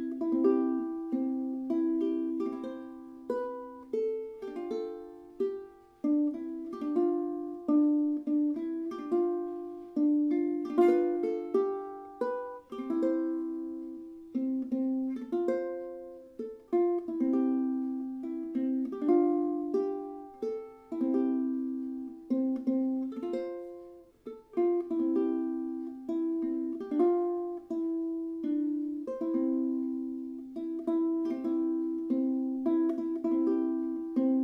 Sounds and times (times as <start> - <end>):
Lullaby: 0.0 - 34.4.